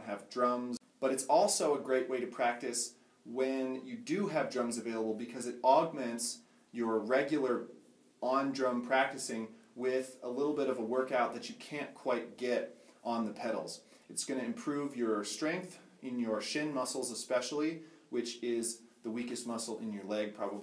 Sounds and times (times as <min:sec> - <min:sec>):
Speech: 0:00.0 - 0:20.6.